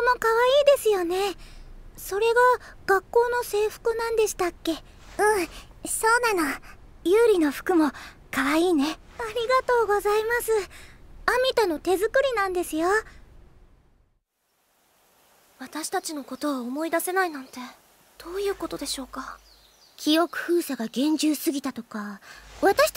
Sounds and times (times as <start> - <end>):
Speech: 0.0 - 1.4, 2.0 - 10.7, 11.3 - 13.1, 15.6 - 19.4, 20.0 - 22.9.